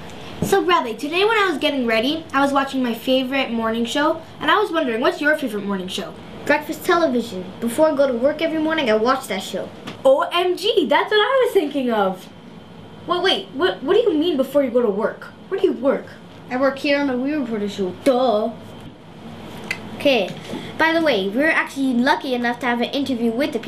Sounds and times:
Speech: 0.4s - 12.3s, 13.1s - 18.6s, 20.0s - 23.6s.

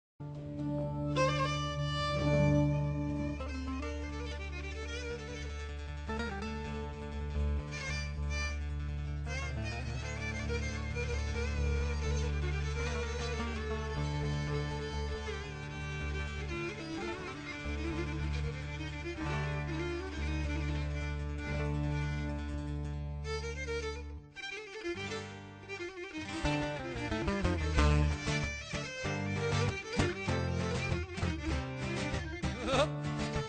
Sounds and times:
String section: 0.2s - 33.4s
Violin, fiddle: 0.2s - 33.4s.

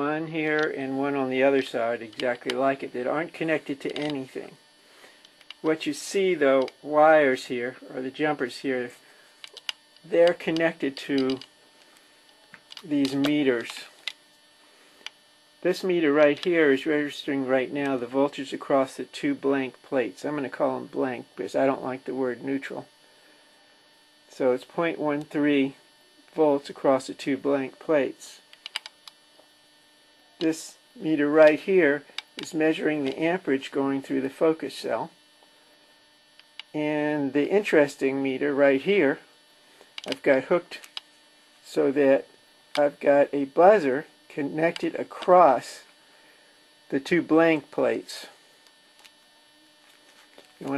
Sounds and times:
Speech: 0.0s - 4.6s, 5.6s - 9.0s, 10.1s - 11.5s, 12.8s - 14.0s, 15.6s - 22.9s, 24.3s - 28.4s, 30.4s - 35.2s, 36.7s - 39.3s, 40.1s - 40.9s, 41.6s - 45.9s, 46.9s - 48.4s.

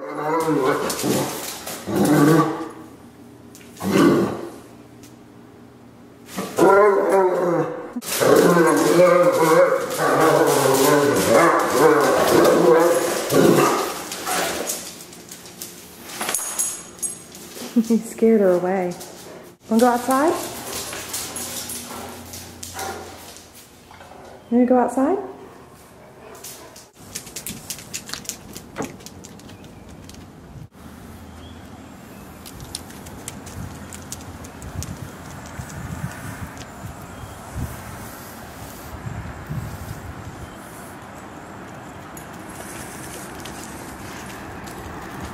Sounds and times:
Speech: 17.8s - 19.0s, 19.7s - 20.5s, 24.5s - 25.4s
Dog: 20.3s - 23.2s.

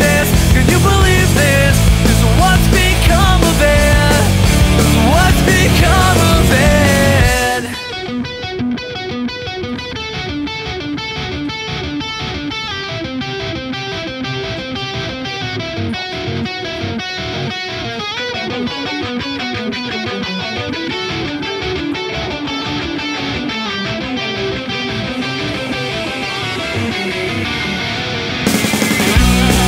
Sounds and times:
Electric guitar: 0.0s - 29.6s.

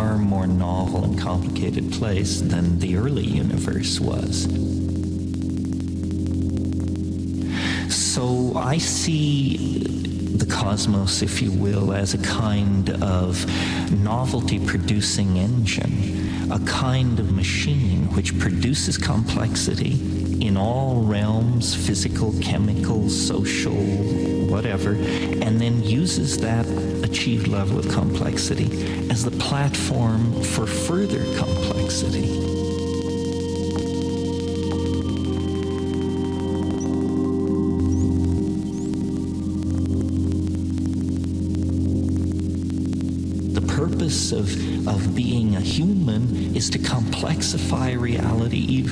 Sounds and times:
Speech: 0.0s - 4.7s, 7.5s - 32.6s, 43.6s - 48.9s
Music: 0.0s - 48.9s.

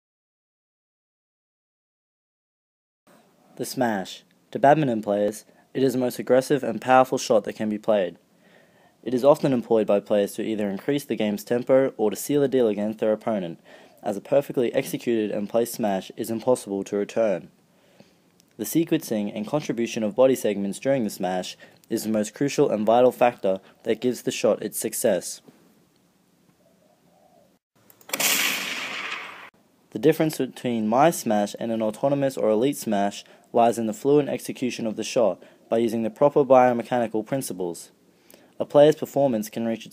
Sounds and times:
Speech: 3.6s - 8.2s, 9.0s - 17.5s, 18.6s - 25.5s, 29.9s - 38.0s, 38.6s - 39.9s.

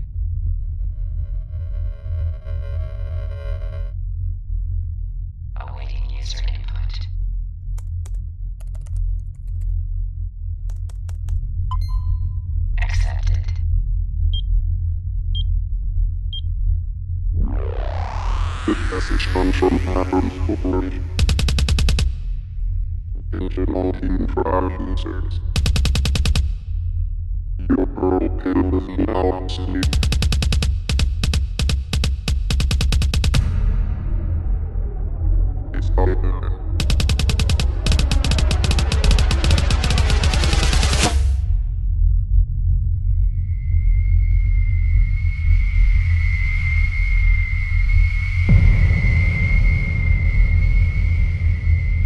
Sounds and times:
Speech: 5.6s - 7.1s, 12.8s - 13.6s, 18.7s - 21.1s, 23.3s - 25.5s, 27.6s - 29.9s, 35.7s - 36.7s
Drum: 17.9s - 22.4s, 25.4s - 26.8s, 29.8s - 34.0s, 36.7s - 41.4s.

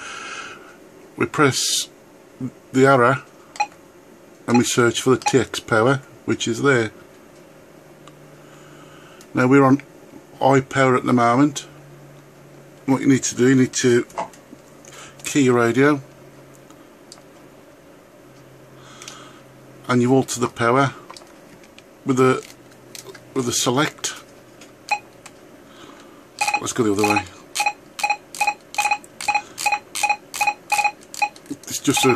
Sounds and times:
Speech: 1.2s - 3.3s, 4.5s - 7.0s, 9.3s - 11.7s, 12.8s - 14.2s, 15.2s - 16.1s, 19.8s - 21.0s, 22.1s - 22.4s, 23.3s - 24.3s, 26.6s - 27.4s, 31.5s - 32.1s.

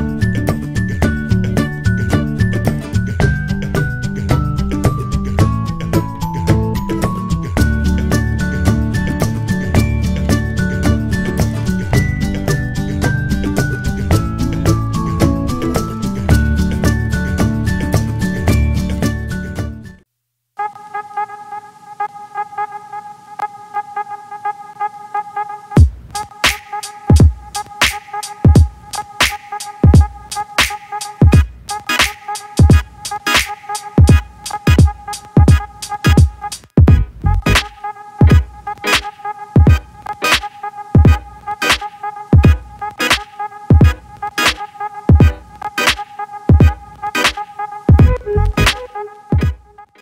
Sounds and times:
Background music: 0.0s - 20.0s, 20.6s - 50.0s.

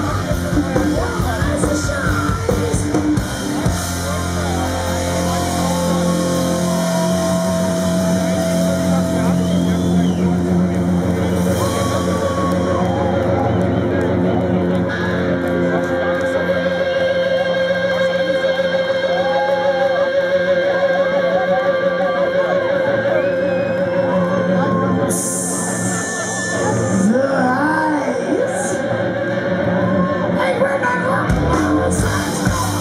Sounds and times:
Drum: 0.0s - 16.4s, 31.3s - 32.8s
Guitar: 0.0s - 32.8s.

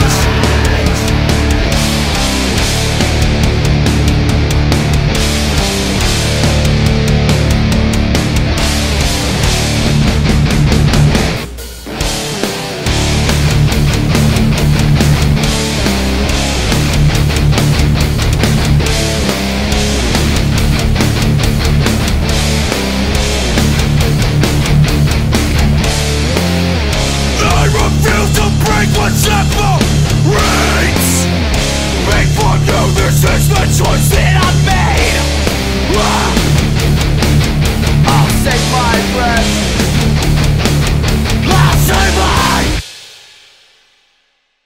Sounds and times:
Heavy metal: 0.0s - 43.8s.

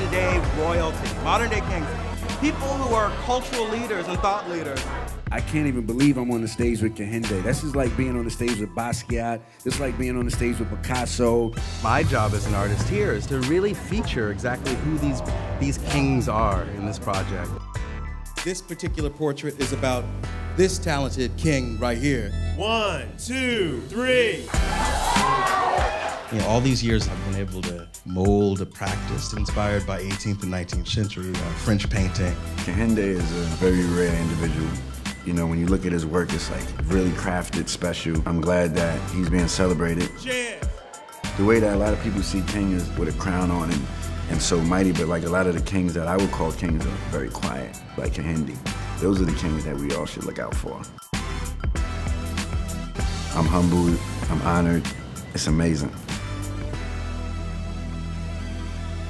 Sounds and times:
Speech: 0.0s - 17.6s, 18.4s - 24.4s, 26.3s - 40.6s, 41.4s - 50.9s, 53.3s - 56.0s
Music: 0.0s - 59.0s.

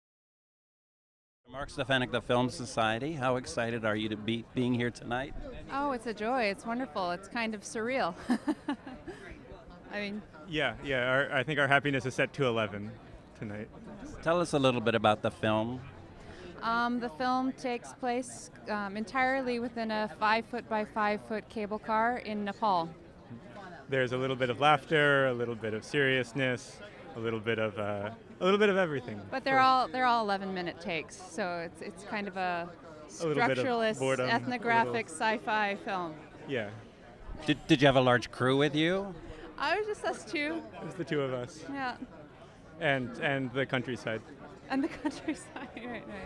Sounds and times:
Speech: 33.2s - 35.0s.

